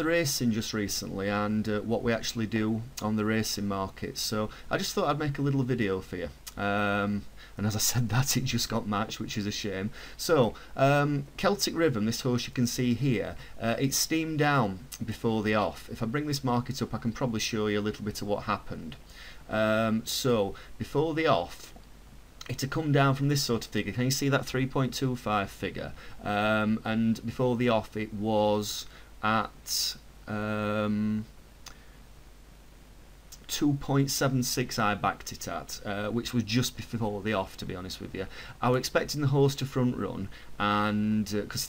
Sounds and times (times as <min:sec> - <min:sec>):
Speech: 0:00.0 - 0:21.8, 0:22.4 - 0:31.3, 0:33.4 - 0:41.6.